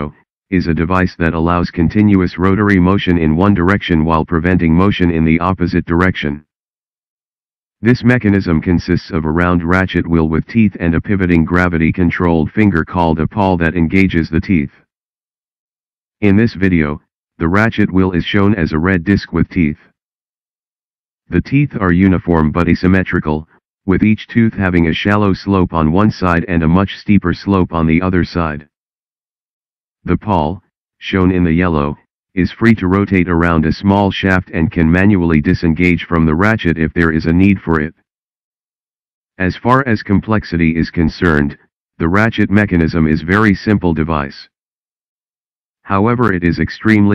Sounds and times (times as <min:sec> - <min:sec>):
Speech: 0:00.0 - 0:06.5, 0:07.8 - 0:14.8, 0:16.2 - 0:19.9, 0:21.3 - 0:28.7, 0:30.0 - 0:38.0, 0:39.4 - 0:44.6, 0:45.9 - 0:47.1.